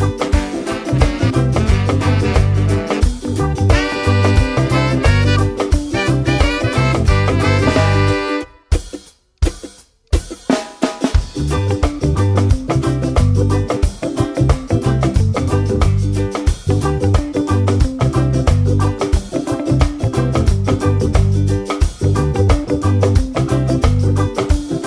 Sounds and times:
Drum kit: 0:00.0 - 0:24.8
Snare drum: 0:00.2 - 0:12.0.

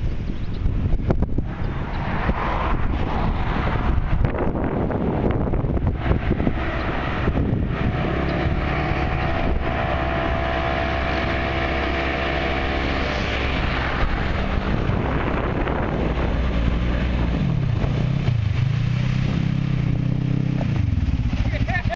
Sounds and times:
Speech: 0:21.3 - 0:21.9.

